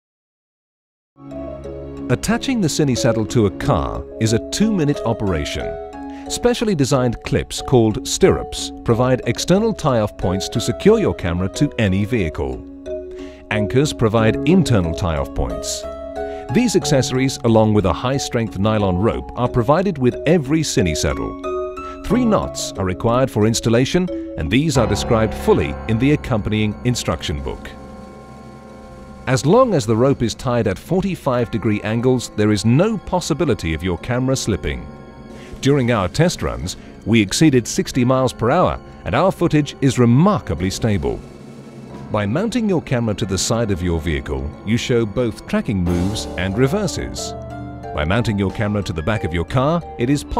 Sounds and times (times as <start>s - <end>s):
Speech: 2.1s - 12.6s, 13.5s - 15.9s, 16.5s - 21.4s, 22.0s - 27.8s, 29.3s - 34.9s, 35.6s - 41.2s, 42.2s - 47.3s, 48.0s - 50.4s.